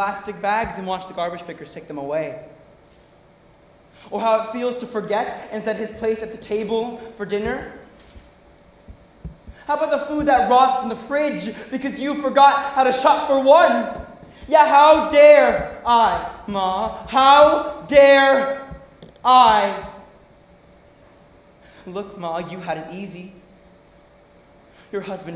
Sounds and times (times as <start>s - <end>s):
Speech: 0.0s - 2.5s, 4.1s - 7.8s, 9.7s - 18.7s, 19.3s - 20.0s, 21.9s - 23.4s, 24.9s - 25.3s.